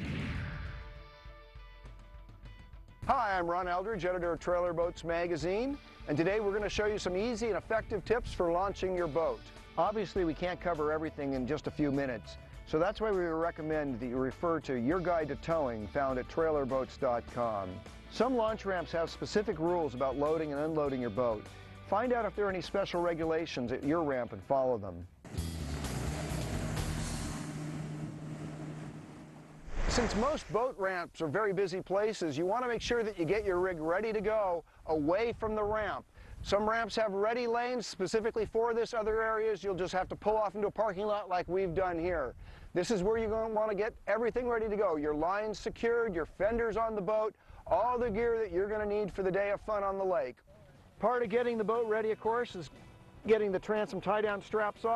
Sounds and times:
Music: 0.0 - 27.5, 47.7 - 54.9
Speech: 3.1 - 25.1, 29.9 - 50.4, 51.0 - 54.9.

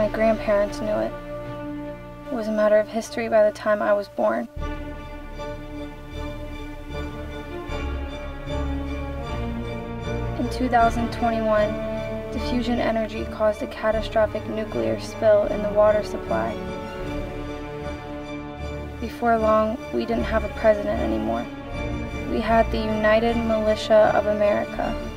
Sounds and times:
Speech: 0.0 - 1.1, 2.3 - 4.5, 10.4 - 16.6, 19.0 - 21.5, 22.3 - 25.0
Music: 0.0 - 25.1.

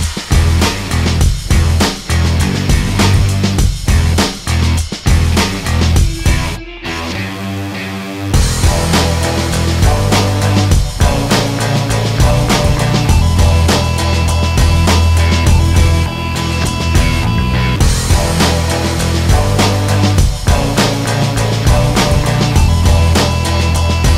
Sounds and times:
Music: 0.0 - 24.1.

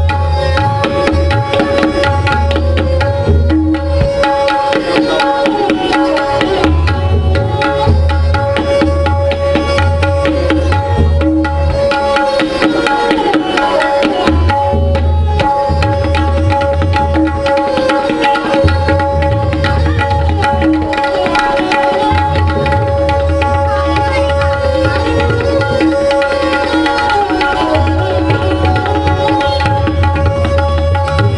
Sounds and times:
Tabla: 0.0 - 31.3.

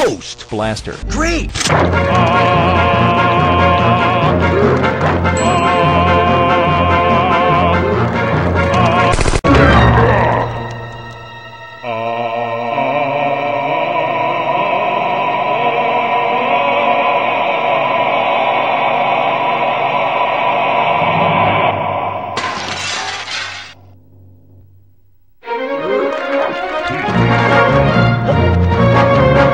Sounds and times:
Music: 0.0 - 22.2, 25.4 - 29.5
Shatter: 22.4 - 24.0.

